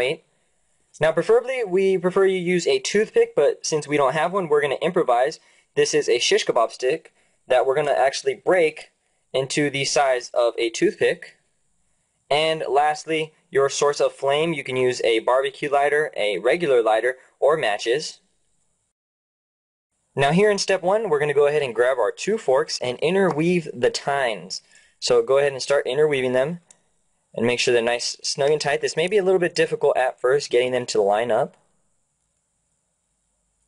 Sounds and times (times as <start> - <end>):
Speech: 0.0 - 0.3, 1.0 - 11.4, 12.3 - 18.3, 20.2 - 26.7, 27.3 - 31.6.